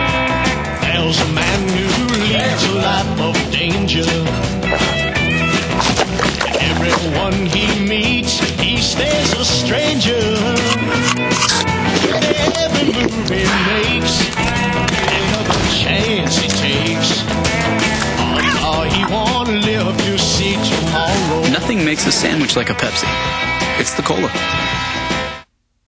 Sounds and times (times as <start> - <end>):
Music: 0.0 - 25.5
Speech: 21.0 - 23.1, 23.8 - 24.5.